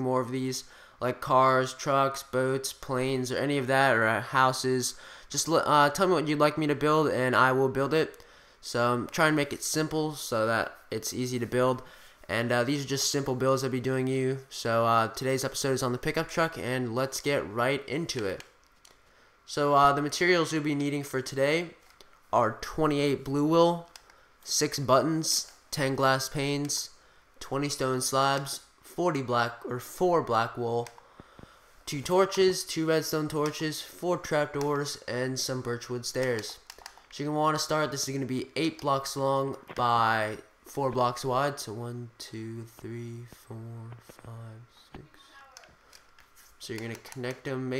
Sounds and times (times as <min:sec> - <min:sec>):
Speech: 0:00.0 - 0:18.5, 0:19.5 - 0:23.9, 0:24.5 - 0:31.0, 0:31.9 - 0:45.8, 0:46.6 - 0:47.8.